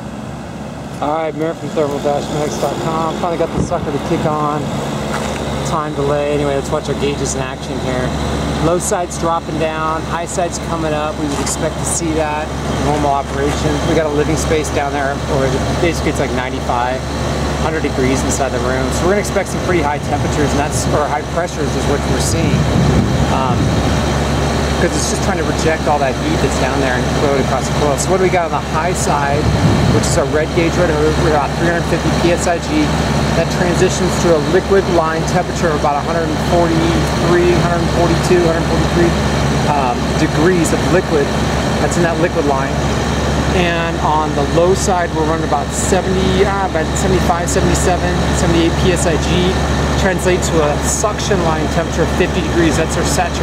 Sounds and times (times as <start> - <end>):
Speech: 1.0 - 4.7, 5.6 - 23.9, 24.7 - 42.9, 43.5 - 53.4.